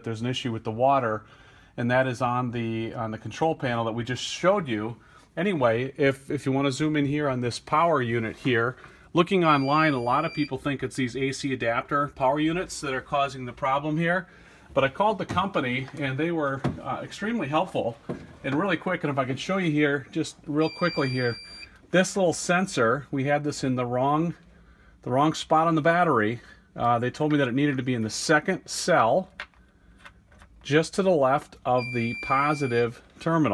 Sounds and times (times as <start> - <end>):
Speech: 0.0 - 24.4, 25.0 - 29.4, 30.6 - 33.5.